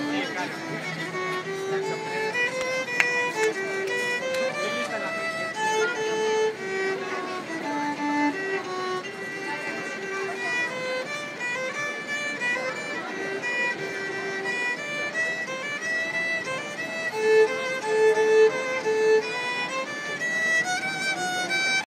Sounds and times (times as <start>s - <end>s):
Speech: 0.0s - 17.3s
Violin, fiddle: 0.0s - 21.8s.